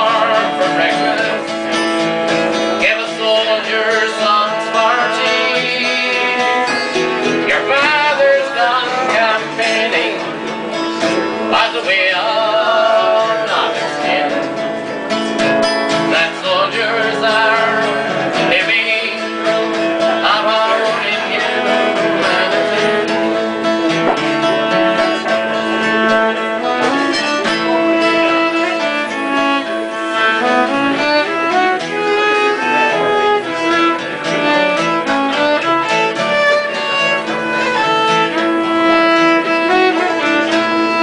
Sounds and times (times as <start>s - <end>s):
Acoustic guitar: 0.0s - 41.0s
Strum: 0.0s - 41.0s.